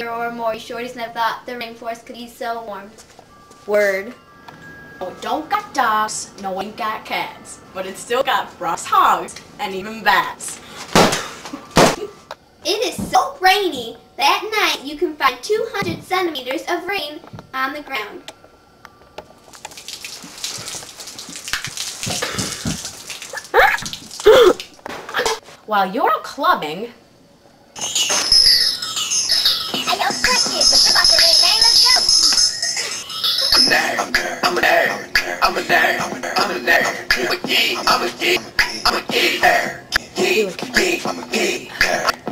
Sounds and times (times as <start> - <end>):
Raindrop: 19.4 - 24.8.